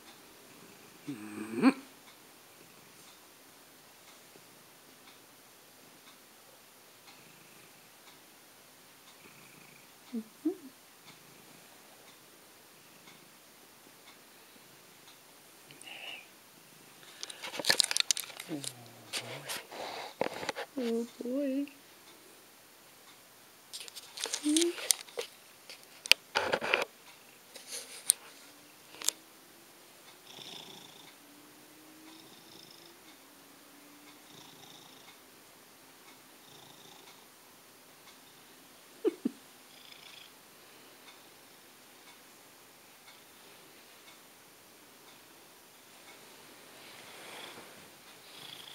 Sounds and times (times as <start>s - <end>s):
Purr: 9.1s - 11.7s, 18.4s - 20.2s, 30.2s - 31.1s, 32.1s - 33.0s, 34.2s - 35.1s, 36.4s - 37.2s, 39.7s - 40.3s, 48.3s - 48.7s.